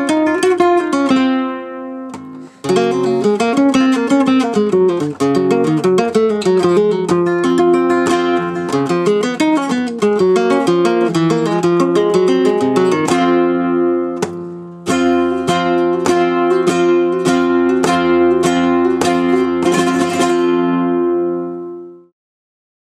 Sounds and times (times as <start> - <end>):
Guitar: 0.0 - 22.1.